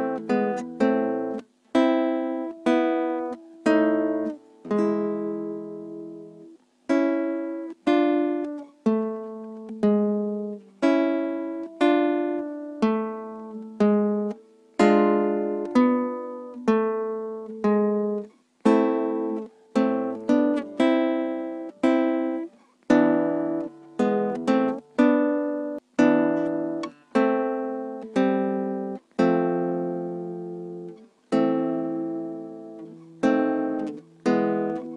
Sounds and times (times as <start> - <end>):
Acoustic guitar: 0.0 - 34.9.